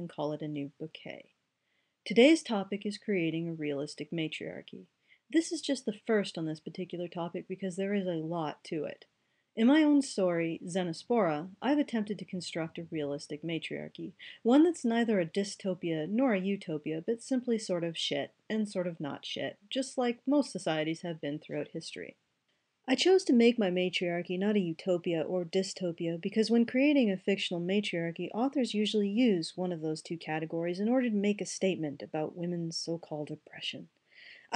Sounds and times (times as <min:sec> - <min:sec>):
Speech: 0:00.0 - 0:01.3, 0:02.1 - 0:09.0, 0:09.6 - 0:22.2, 0:22.9 - 0:34.5.